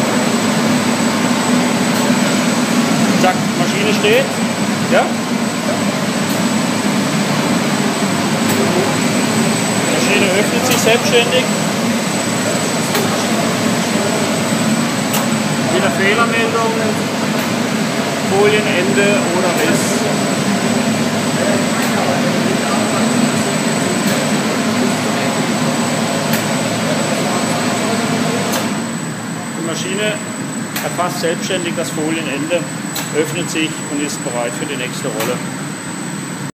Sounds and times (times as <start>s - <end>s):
Speech: 3.1s - 5.9s, 9.9s - 11.5s, 15.6s - 17.1s, 18.2s - 20.2s, 29.4s - 35.4s.